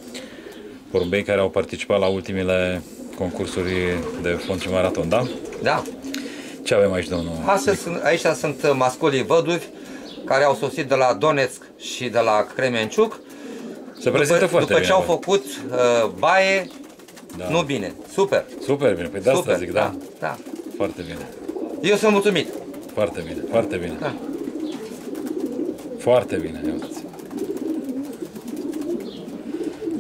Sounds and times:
Pigeon, dove: 0.0s - 1.1s, 2.8s - 30.0s
Speech: 0.9s - 5.9s, 6.7s - 9.7s, 10.3s - 13.2s, 14.0s - 16.7s, 17.3s - 24.2s, 26.0s - 27.1s.

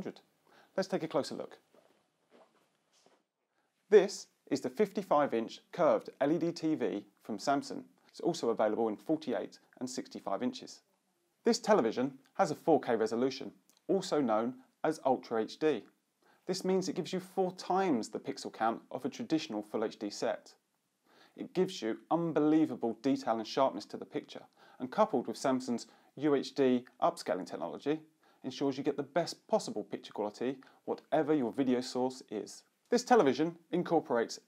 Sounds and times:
Speech: 0.0s - 1.6s, 3.9s - 20.6s, 21.4s - 34.4s.

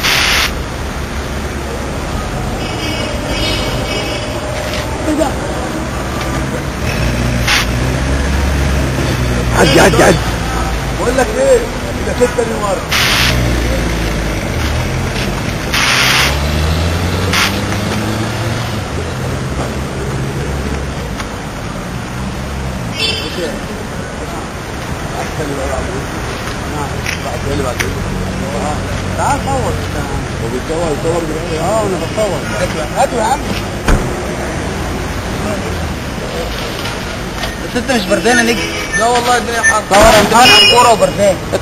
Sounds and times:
Car passing by: 12.9s - 20.9s.

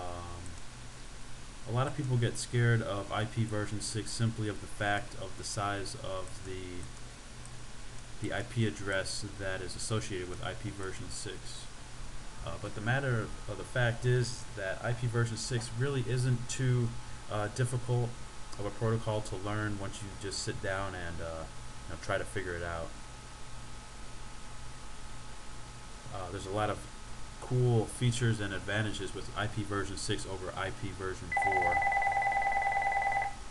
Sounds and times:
Hum: 0.0s - 33.5s.

